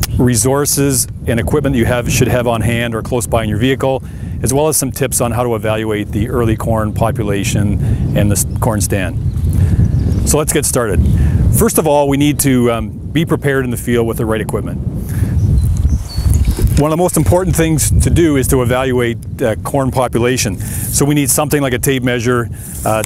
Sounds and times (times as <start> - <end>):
Speech: 0.2 - 9.2, 10.3 - 11.0, 11.6 - 14.8, 16.8 - 23.0.